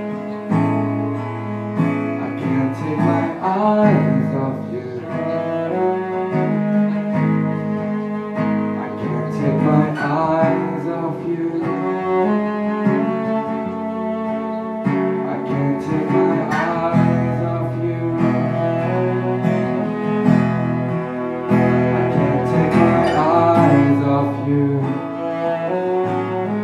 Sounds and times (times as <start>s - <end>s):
Cello: 0.0s - 26.6s
Guitar: 0.0s - 26.6s.